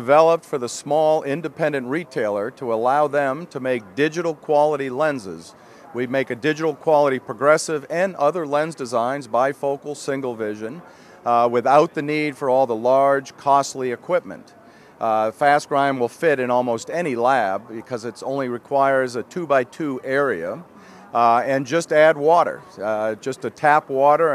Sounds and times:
Speech: 0.0s - 24.3s.

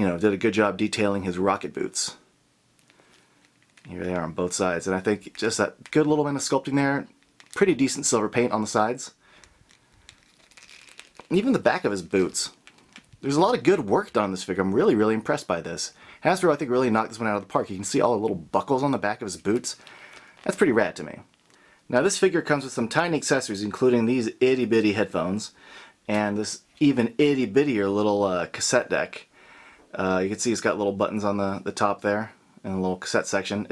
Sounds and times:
Speech: 0.0s - 2.3s, 3.9s - 9.2s, 11.3s - 12.6s, 13.2s - 19.8s, 20.4s - 21.3s, 21.9s - 29.3s, 29.9s - 33.7s
Inside, small room: 0.0s - 33.7s.

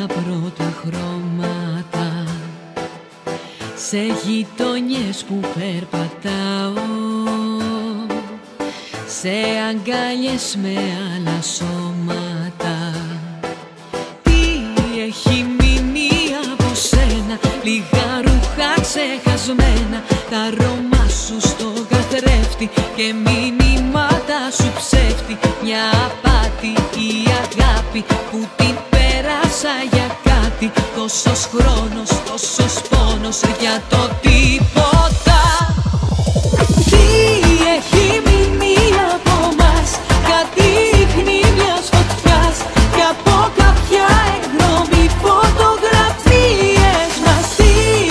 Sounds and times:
Music: 0.0s - 48.1s.

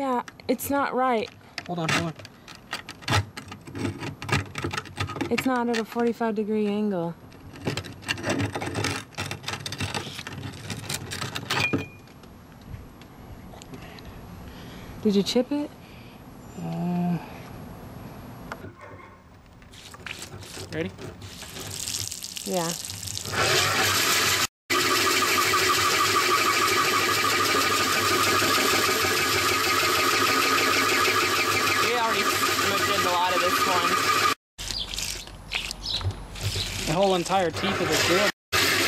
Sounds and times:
Drill: 23.3s - 34.4s, 37.7s - 38.8s.

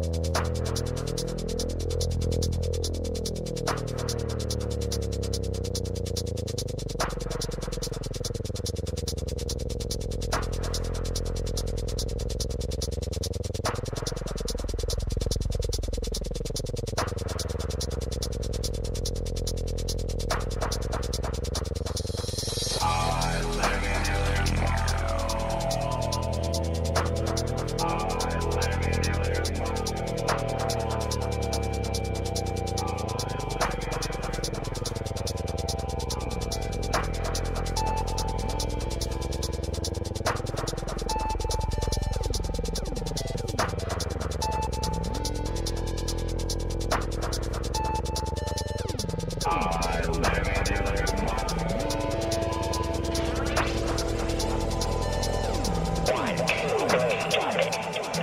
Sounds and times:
Music: 0.0s - 58.2s.

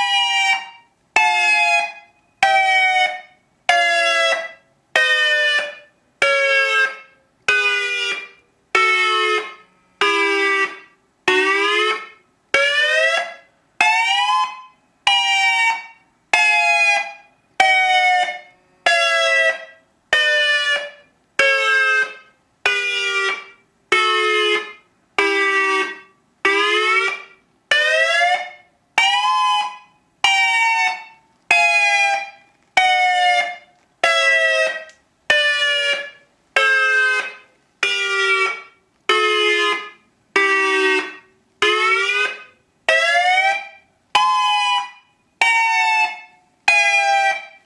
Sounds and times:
Siren: 0.0s - 47.6s.

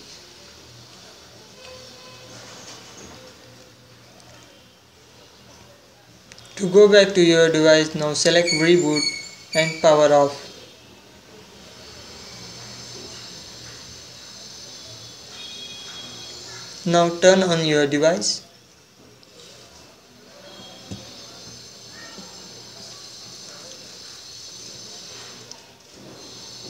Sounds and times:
Speech: 3.2s - 11.8s, 16.8s - 18.5s.

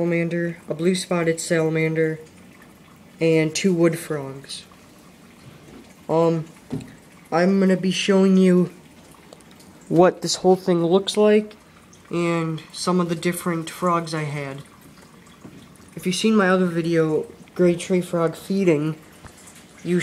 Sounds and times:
Speech: 0.0s - 2.3s, 3.2s - 4.7s, 6.1s - 6.5s, 7.3s - 8.8s, 9.9s - 14.7s, 16.0s - 19.0s.

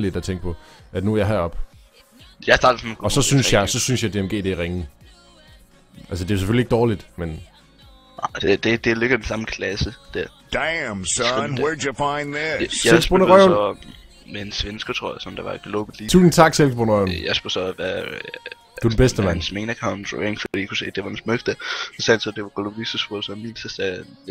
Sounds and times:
Speech: 0.0s - 1.6s, 2.4s - 4.9s, 6.0s - 7.5s, 8.2s - 24.3s
Music: 0.0s - 24.3s.

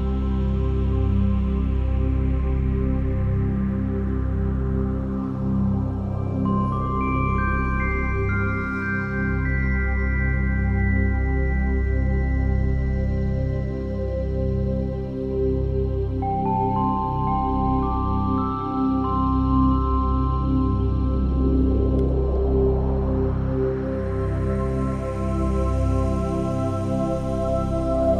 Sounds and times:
New-age music: 0.0s - 28.1s.

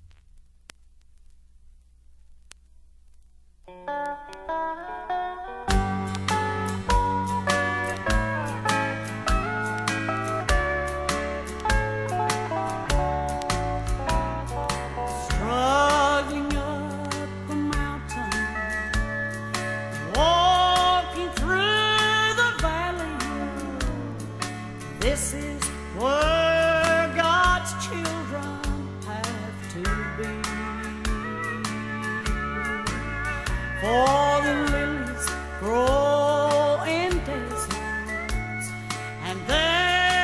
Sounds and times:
Music: 3.6s - 40.2s.

